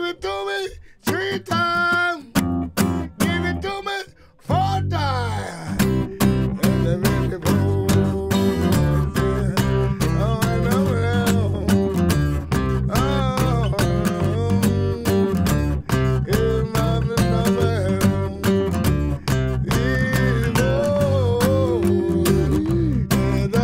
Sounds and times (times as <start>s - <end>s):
Music: 1.0s - 23.6s.